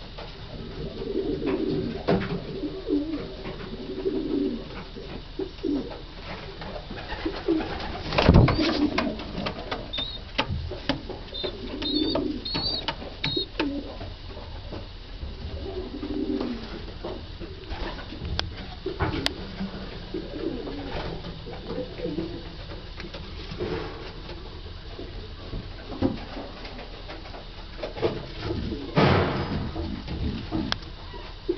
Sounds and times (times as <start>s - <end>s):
Coo: 0.5s - 6.0s, 6.8s - 10.3s, 11.3s - 14.0s, 15.5s - 16.9s, 17.5s - 22.7s, 28.4s - 29.2s
Bird vocalization, bird call, bird song: 9.9s - 10.2s, 11.3s - 13.5s.